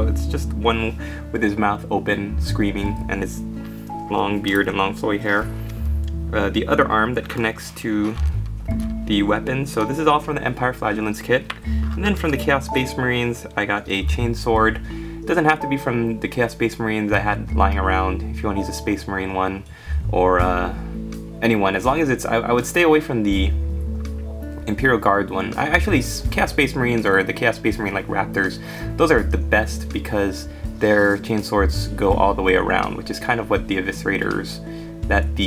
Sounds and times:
Speech: 0:00.0 - 0:03.4, 0:04.0 - 0:05.6, 0:06.3 - 0:08.3, 0:09.0 - 0:23.6, 0:24.7 - 0:35.4
Music: 0:00.0 - 0:35.4.

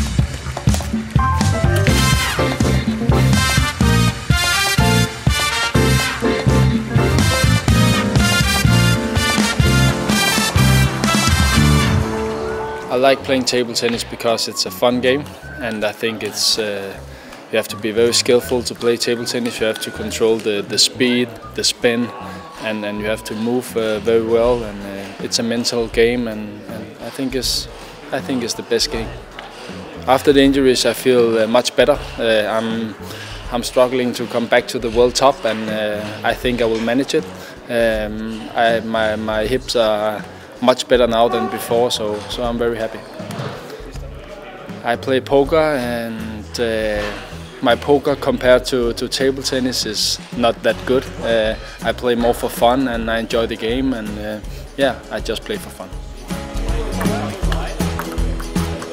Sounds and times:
Music: 0:00.0 - 0:58.9
Speech: 0:12.9 - 0:29.4, 0:30.0 - 0:56.0, 0:56.6 - 0:57.9.

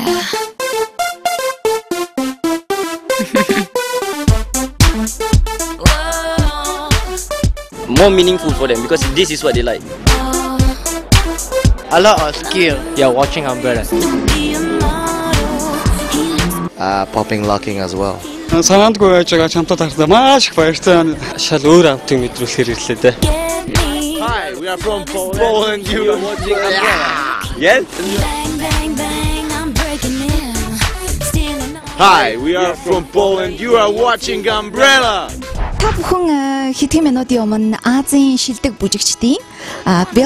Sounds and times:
Exciting music: 0:00.0 - 0:40.2
Speech: 0:24.2 - 0:27.8, 0:32.0 - 0:37.6.

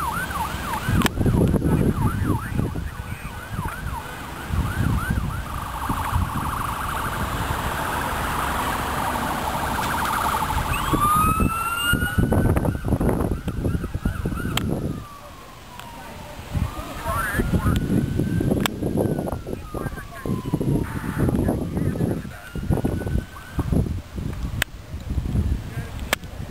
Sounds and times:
Fire engine, fire truck (siren): 0:00.0 - 0:24.7
Speech: 0:19.6 - 0:22.7, 0:25.6 - 0:26.5.

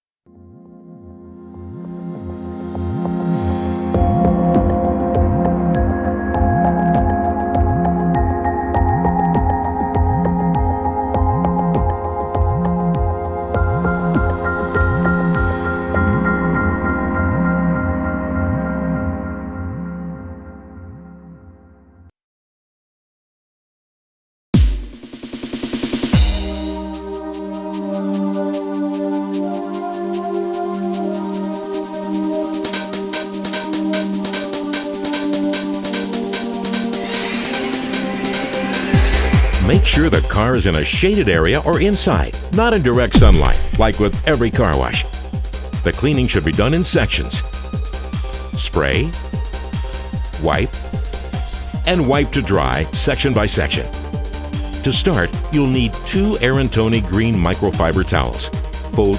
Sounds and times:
Music: 0:00.3 - 0:22.1, 0:24.6 - 0:59.1.

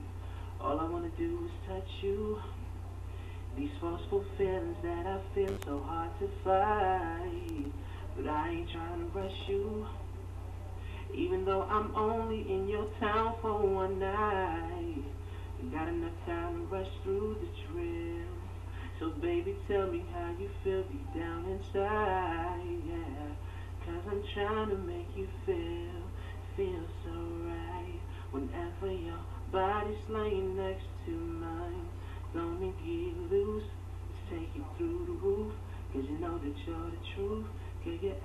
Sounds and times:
Male singing: 0:00.6 - 0:02.7, 0:03.5 - 0:10.1, 0:11.0 - 0:38.2.

